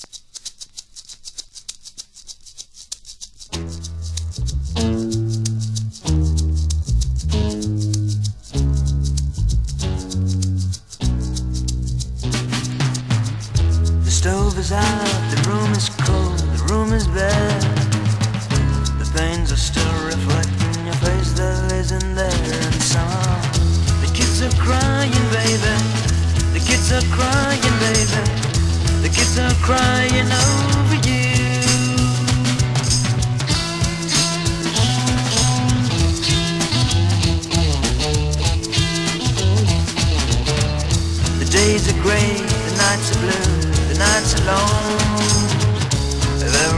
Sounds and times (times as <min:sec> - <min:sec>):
Music: 0:03.2 - 0:46.7.